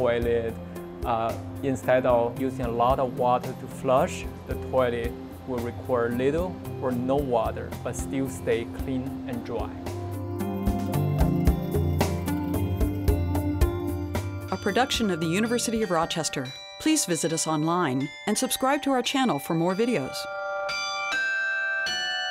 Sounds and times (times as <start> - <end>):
Speech: 0.0 - 9.8, 14.6 - 20.3
Music: 0.0 - 22.3.